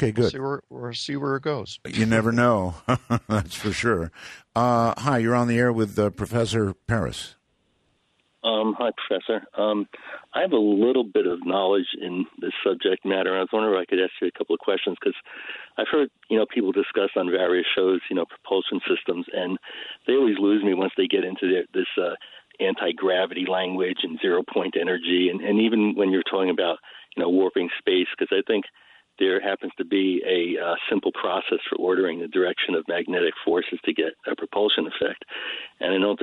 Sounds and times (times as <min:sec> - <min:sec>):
Speech: 0:00.0 - 0:07.3, 0:08.4 - 0:36.2.